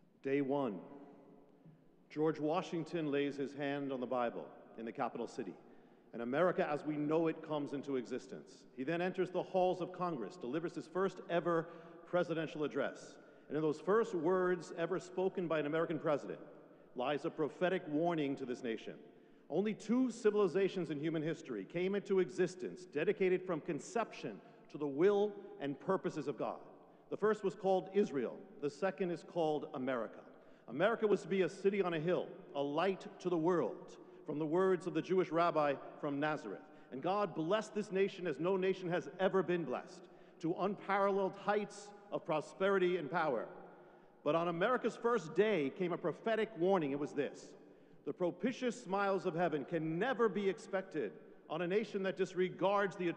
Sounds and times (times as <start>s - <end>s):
Narration, monologue: 0.0s - 53.1s
Male speech, man speaking: 0.2s - 0.9s, 2.1s - 16.4s, 17.0s - 43.5s, 44.3s - 53.1s.